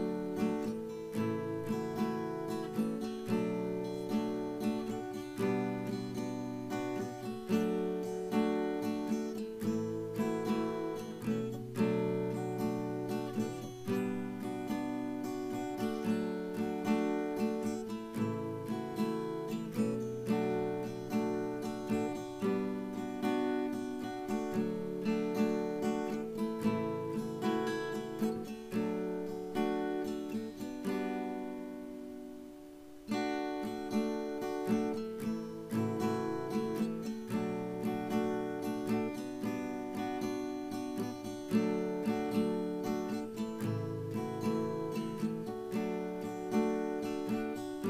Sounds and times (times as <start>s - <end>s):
Acoustic guitar: 0.0s - 47.9s.